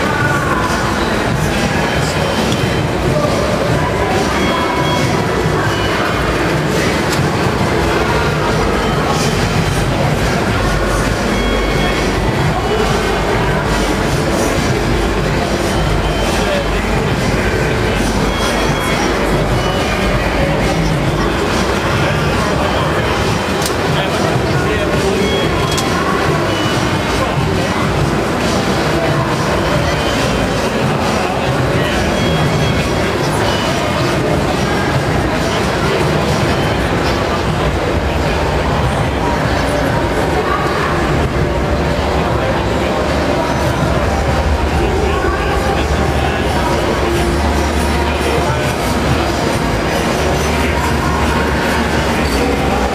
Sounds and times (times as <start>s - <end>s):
Music: 0.0s - 52.9s
Speech: 0.0s - 52.9s.